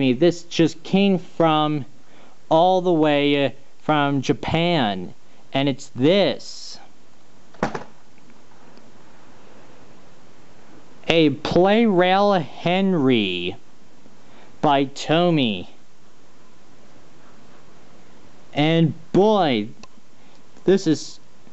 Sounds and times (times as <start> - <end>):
Speech: 0.0 - 1.9, 2.5 - 6.9, 11.0 - 13.6, 14.6 - 15.8, 18.6 - 19.8, 20.6 - 21.2.